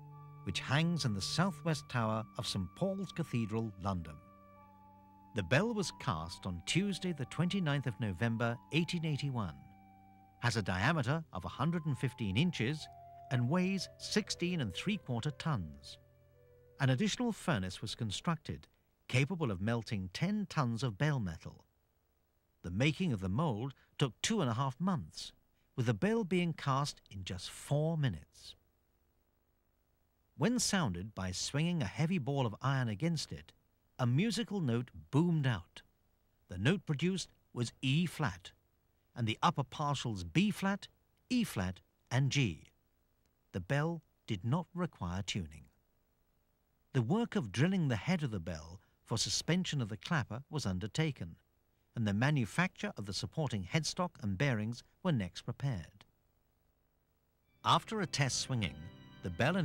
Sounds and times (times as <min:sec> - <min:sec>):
Music: 0:00.0 - 0:17.9, 0:57.5 - 0:59.6
Speech: 0:00.5 - 0:04.2, 0:05.4 - 0:09.6, 0:10.4 - 0:16.0, 0:16.8 - 0:21.7, 0:22.6 - 0:28.6, 0:30.4 - 0:35.9, 0:36.5 - 0:38.6, 0:39.2 - 0:42.8, 0:43.6 - 0:45.8, 0:47.0 - 0:51.4, 0:52.0 - 0:56.1, 0:57.7 - 0:59.6.